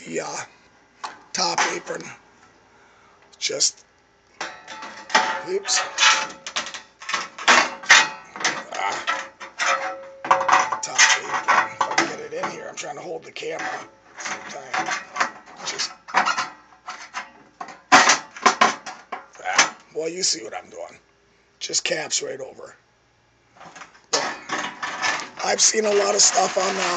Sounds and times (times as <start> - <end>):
Speech: 0.0 - 0.5, 1.4 - 2.2, 3.4 - 3.8, 5.4 - 5.9, 8.6 - 9.1, 10.7 - 13.8, 14.4 - 14.9, 15.6 - 15.9, 19.4 - 21.0, 21.6 - 22.8, 25.4 - 26.9.